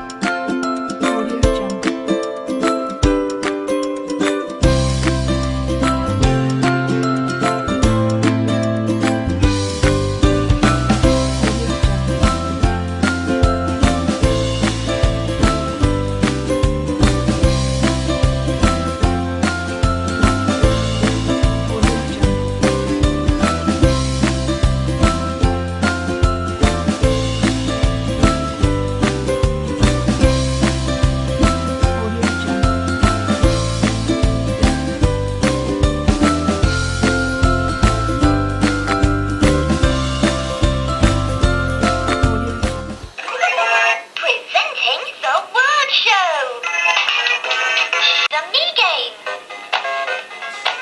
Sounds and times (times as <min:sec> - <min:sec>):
Music: 0:00.0 - 0:43.2, 0:46.7 - 0:50.8
Speech: 0:01.0 - 0:01.8, 0:31.9 - 0:32.7, 0:43.2 - 0:49.2.